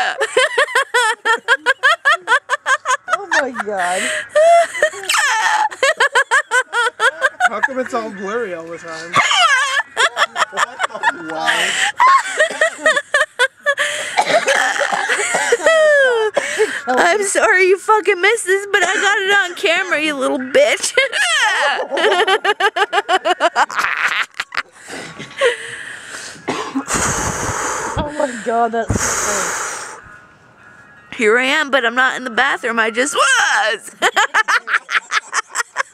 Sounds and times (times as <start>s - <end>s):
Wail, moan: 4.4s - 5.8s, 21.1s - 22.0s.